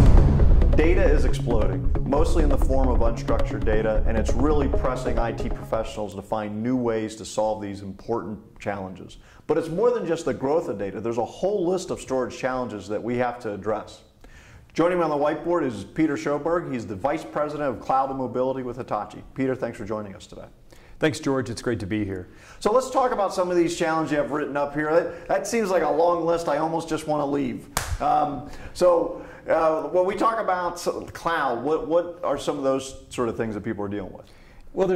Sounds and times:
Speech: 0.8s - 14.1s, 14.8s - 34.9s.

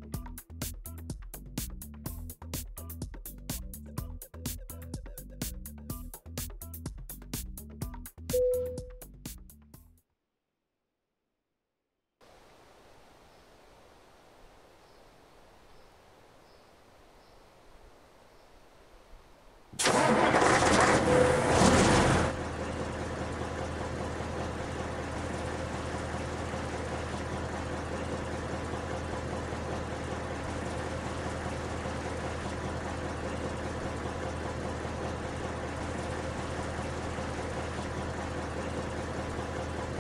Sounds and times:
Music: 0.0s - 10.1s.

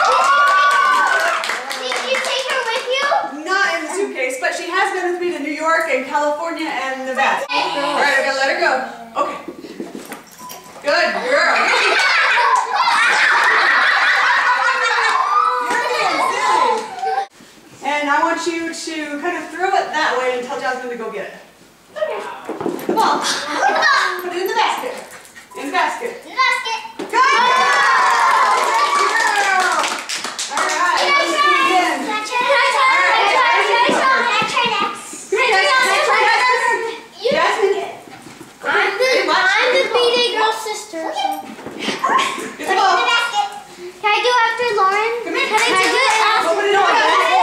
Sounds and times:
Clapping: 0.0s - 3.1s, 27.4s - 31.4s.

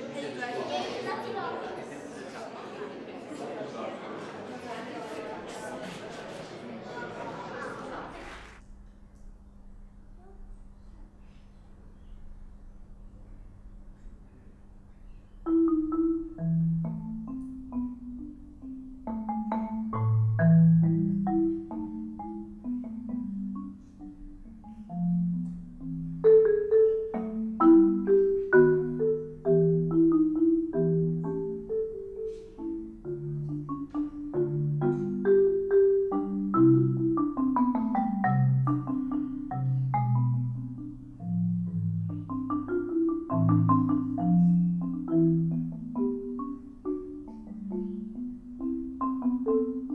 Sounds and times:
Musical instrument: 15.4s - 49.9s.

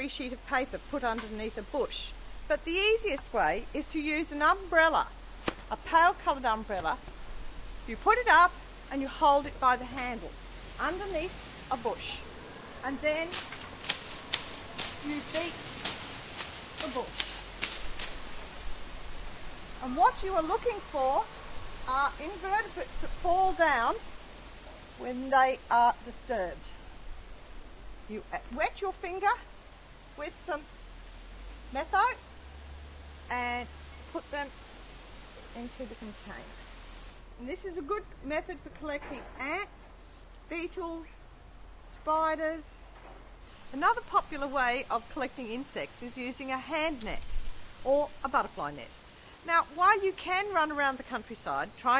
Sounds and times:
Speech: 0.0s - 5.1s, 5.7s - 7.0s, 7.9s - 12.2s, 12.8s - 13.4s, 14.9s - 15.6s, 16.8s - 17.2s, 19.8s - 21.3s, 21.9s - 24.0s, 25.0s - 26.7s, 28.1s - 29.4s, 30.2s - 30.6s, 31.7s - 32.2s, 33.3s - 34.5s, 35.5s - 36.6s, 37.4s - 41.2s, 41.9s - 42.8s, 43.8s - 47.2s, 47.9s - 51.9s.

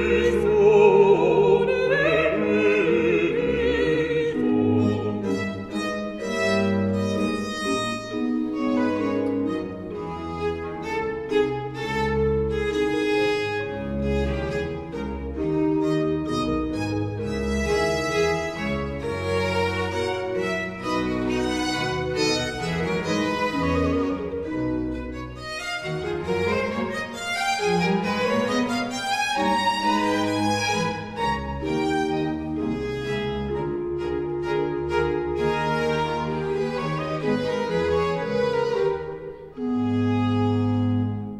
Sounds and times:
Cello: 0.0s - 41.4s
Violin, fiddle: 0.0s - 41.4s.

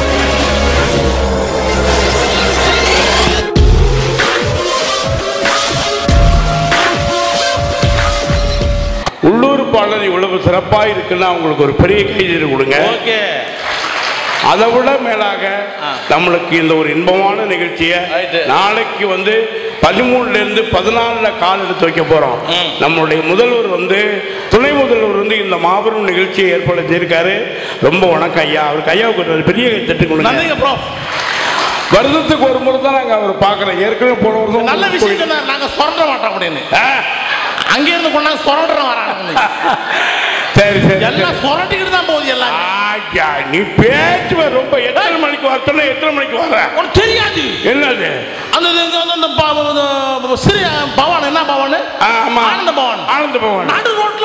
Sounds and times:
Speech: 9.2s - 13.5s, 14.4s - 30.9s, 31.9s - 37.1s, 40.6s - 54.2s
Applause: 13.2s - 15.3s, 31.0s - 32.4s
Clapping: 13.5s - 14.8s, 31.1s - 32.0s.

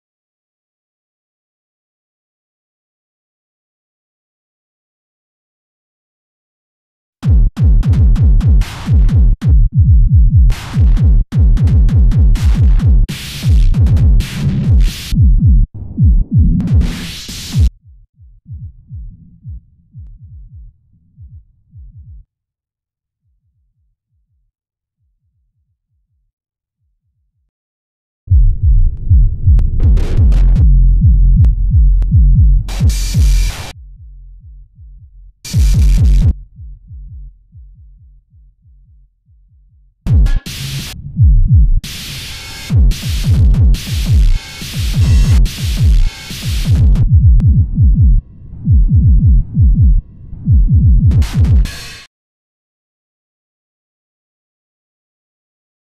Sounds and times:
Drum machine: 7.2s - 22.3s, 28.3s - 52.0s.

